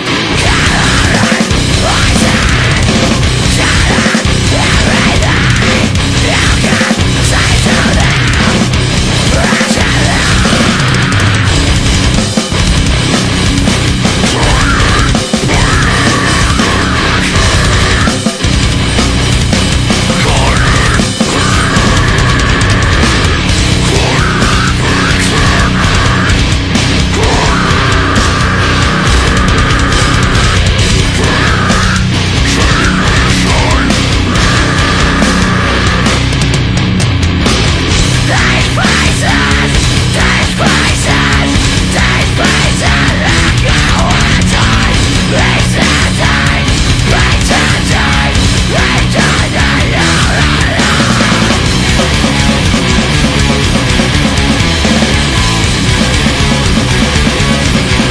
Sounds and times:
Music: 0.0s - 58.1s.

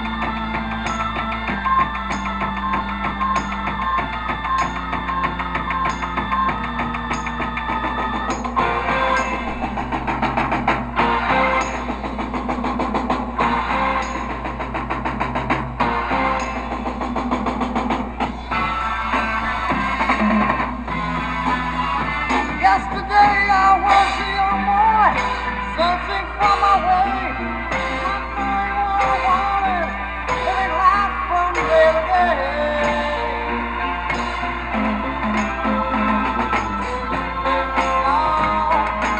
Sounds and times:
Music: 0.0s - 39.1s.

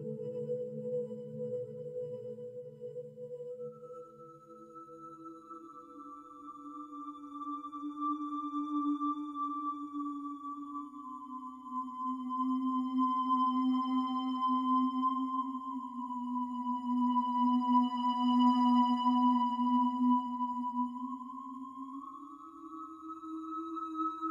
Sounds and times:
Music: 0.0s - 24.3s.

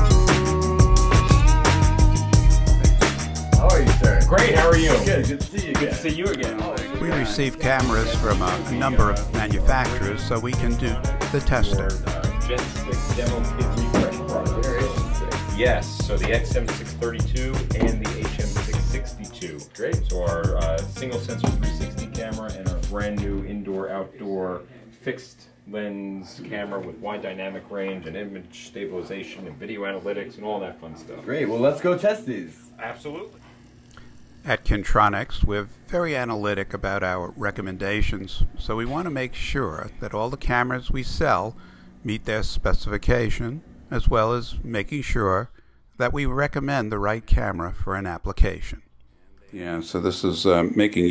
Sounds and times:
Speech: 3.6s - 33.4s, 34.4s - 48.8s, 49.5s - 51.1s.

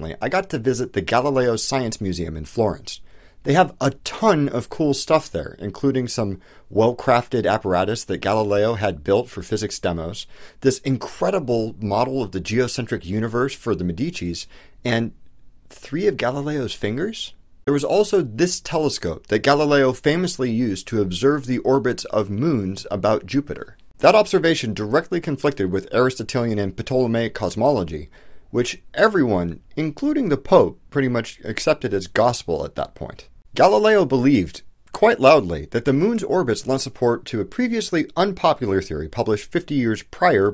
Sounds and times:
Speech: 0.0s - 40.5s.

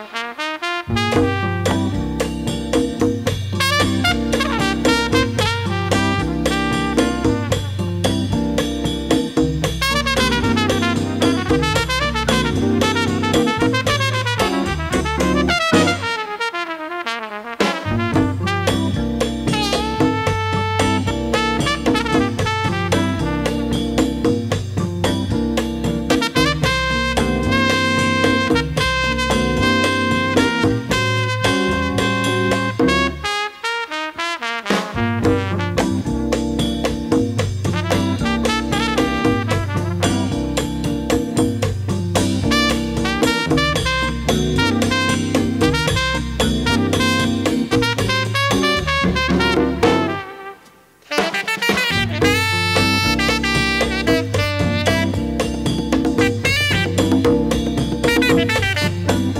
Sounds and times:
Trombone: 0.0s - 59.3s.

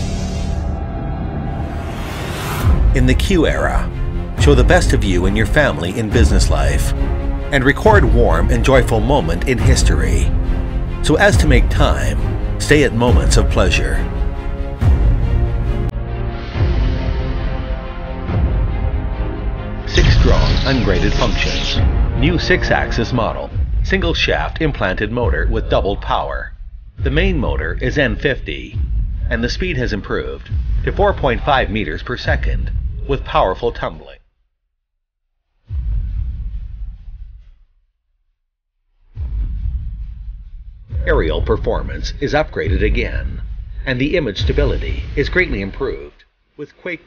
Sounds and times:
Music: 0.0s - 34.0s, 35.5s - 38.0s, 38.9s - 47.0s
Speech: 3.0s - 10.4s, 11.0s - 14.1s, 19.9s - 34.2s, 41.0s - 47.0s.

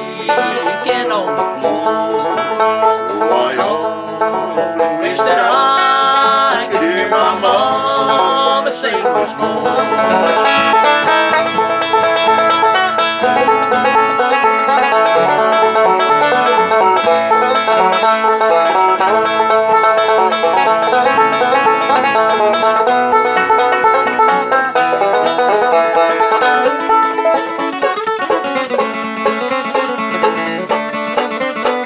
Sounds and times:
Banjo: 0.0s - 31.8s
Country: 0.0s - 31.8s
Guitar: 0.0s - 31.8s.

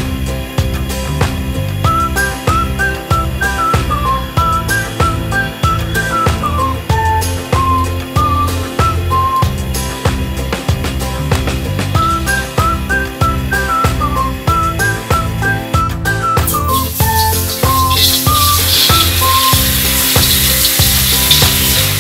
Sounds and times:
Music: 0.0s - 22.0s.

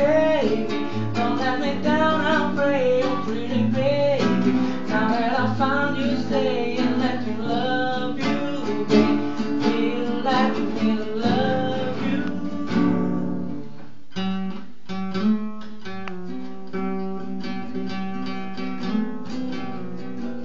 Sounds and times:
Singing: 0.0s - 13.2s
Guitar: 0.0s - 20.4s.

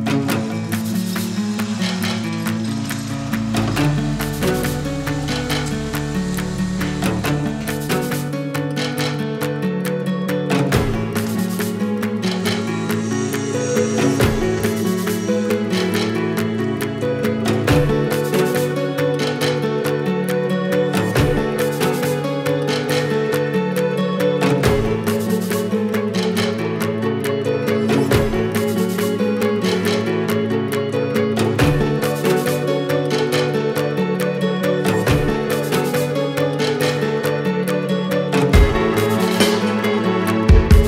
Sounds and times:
Music: 0.0s - 40.8s.

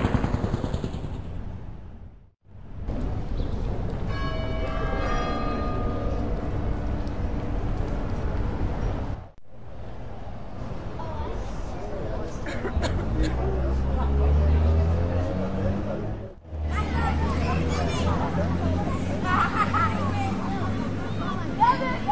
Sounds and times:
Speech: 10.8s - 22.1s.

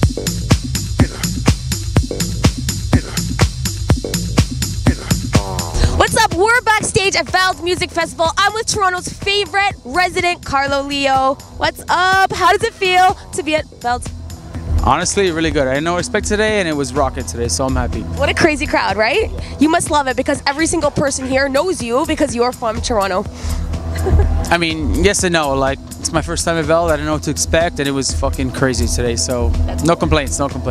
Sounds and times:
Music: 0.0s - 30.7s
Speech: 5.9s - 14.0s, 14.8s - 23.2s, 24.5s - 30.7s.

